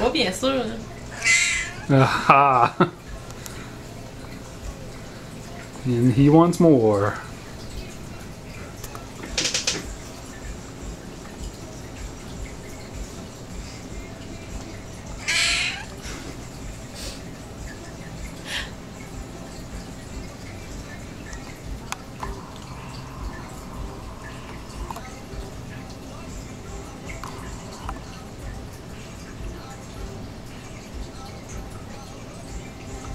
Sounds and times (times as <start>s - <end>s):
Meow: 1.1s - 1.9s, 15.2s - 15.9s.